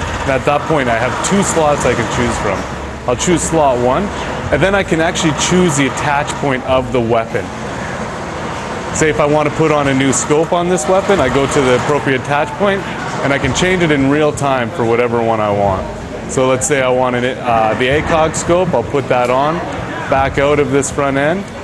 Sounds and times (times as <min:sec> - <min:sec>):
Speech: 0:00.2 - 0:07.5, 0:09.0 - 0:21.6.